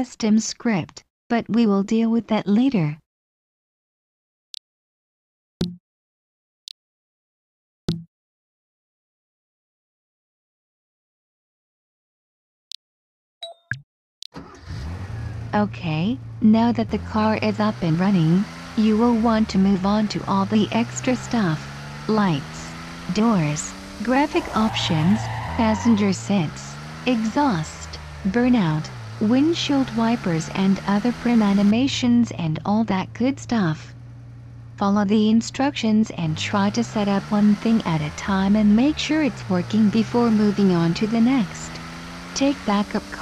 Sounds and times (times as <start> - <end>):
Car: 14.4 - 43.2.